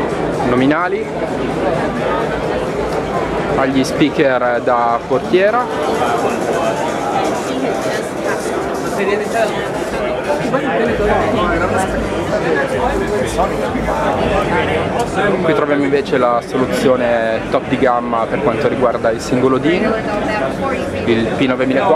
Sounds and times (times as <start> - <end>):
Music: 0.0 - 9.2, 9.8 - 17.7
Speech: 0.4 - 21.9.